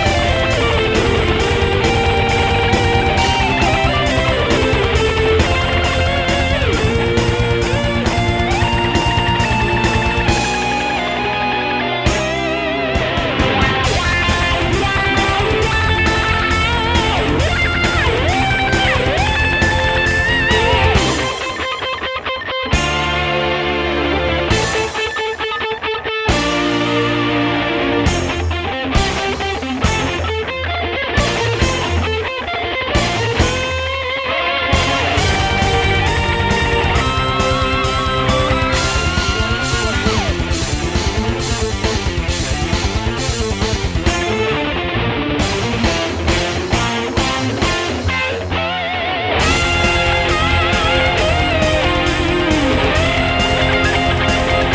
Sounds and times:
Bass guitar: 0.0s - 54.7s
Electric guitar: 0.0s - 54.7s
Strum: 0.0s - 54.7s.

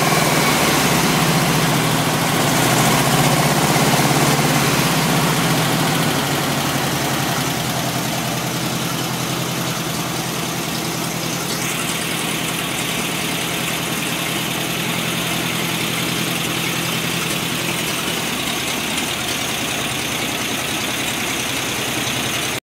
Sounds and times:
Heavy engine (low frequency): 0.0s - 22.6s.

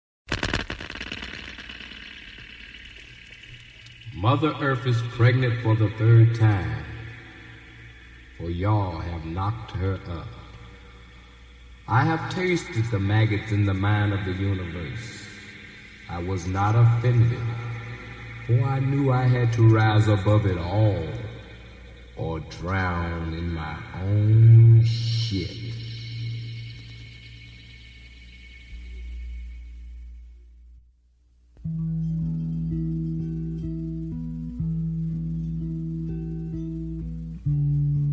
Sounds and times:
Outside, rural or natural: 0.3s - 30.7s
Speech: 4.1s - 7.0s, 8.4s - 10.5s, 11.9s - 15.4s, 16.1s - 17.8s, 18.5s - 21.4s, 22.2s - 25.8s.

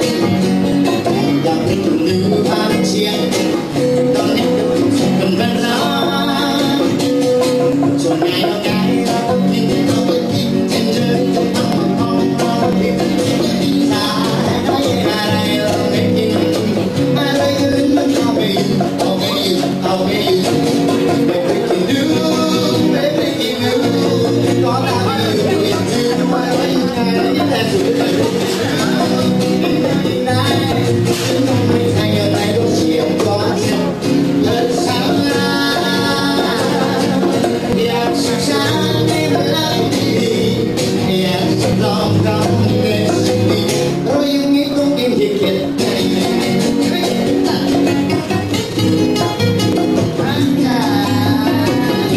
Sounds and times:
Music: 0.0s - 52.1s.

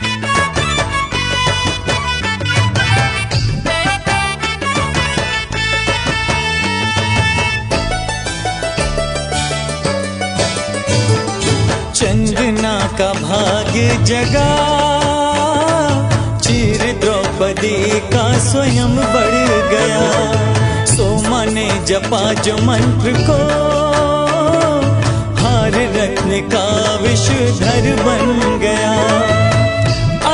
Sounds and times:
Music of Bollywood: 0.0s - 30.3s.

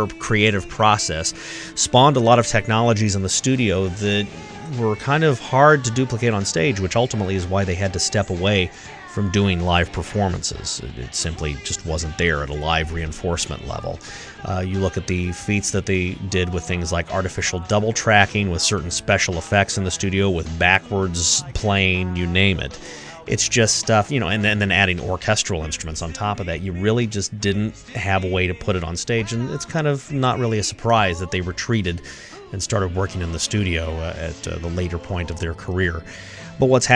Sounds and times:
Music: 0.0s - 36.9s
Speech: 0.0s - 36.9s.

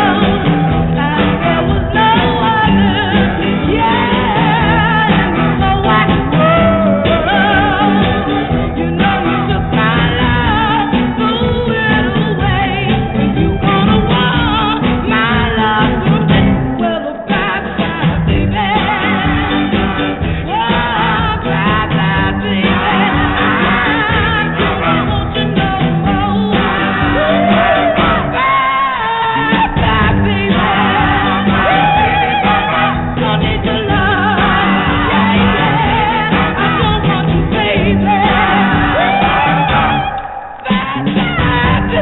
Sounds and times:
Music: 0.0s - 42.0s.

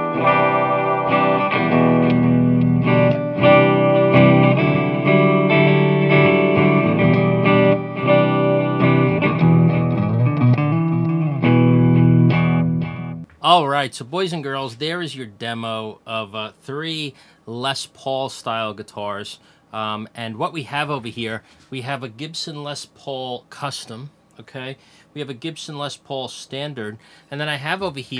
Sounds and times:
Guitar: 0.0s - 13.6s.

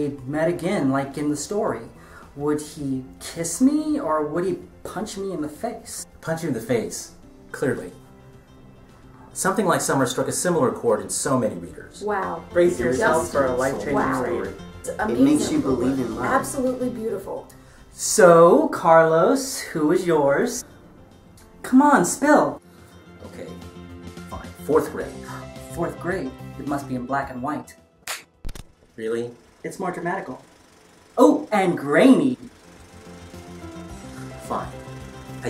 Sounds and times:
Conversation: 0.0s - 35.4s.

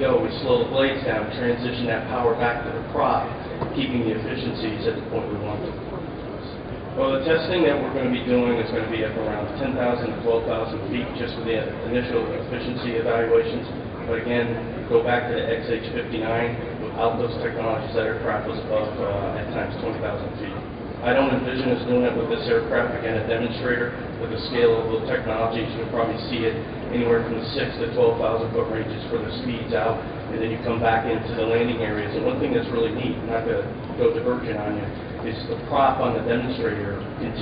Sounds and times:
Male speech, man speaking: 0.0s - 5.8s, 7.0s - 37.4s.

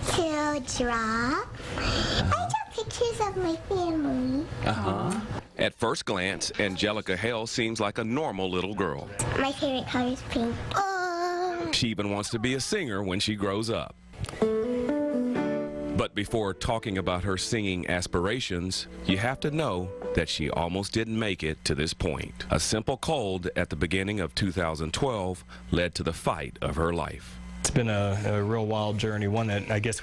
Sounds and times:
Music: 14.3s - 20.6s.

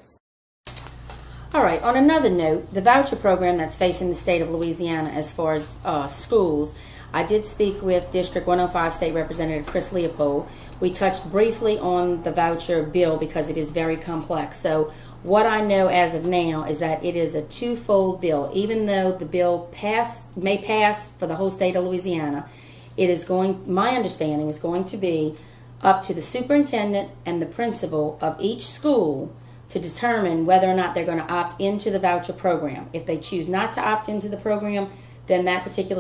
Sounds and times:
Speech: 0.0s - 0.2s, 1.5s - 36.0s.

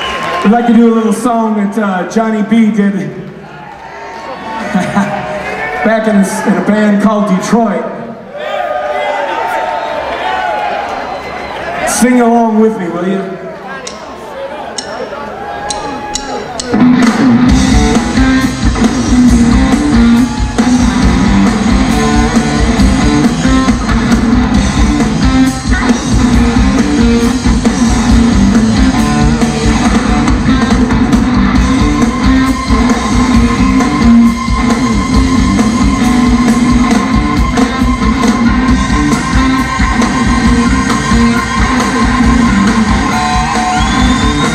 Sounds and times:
Rock and roll: 15.9s - 44.5s.

